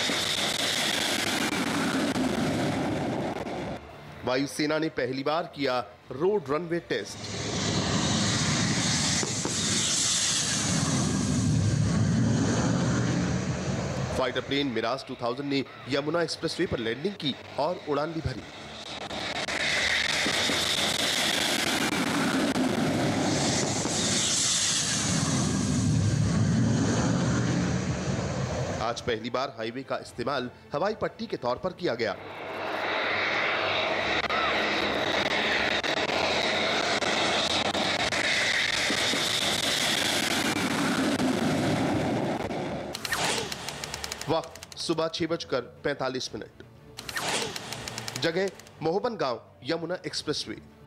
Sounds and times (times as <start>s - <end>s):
Fixed-wing aircraft, airplane: 0.0s - 5.1s, 6.8s - 29.2s, 31.6s - 44.8s, 46.9s - 48.8s
Outside, rural or natural: 0.0s - 29.1s, 31.9s - 45.0s, 46.6s - 49.6s
Music: 2.8s - 8.7s, 25.9s - 32.3s, 43.0s - 50.8s.